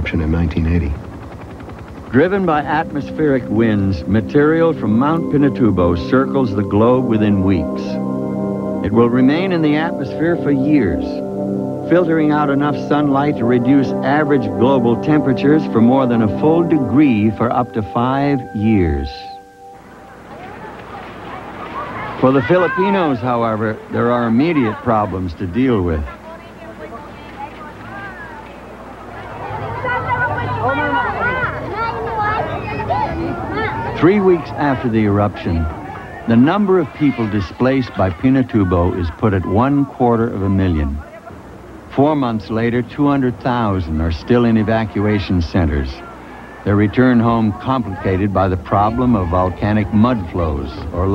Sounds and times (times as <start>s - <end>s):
Speech: 2.1s - 8.0s, 8.8s - 11.2s, 11.9s - 19.4s, 20.4s - 51.1s.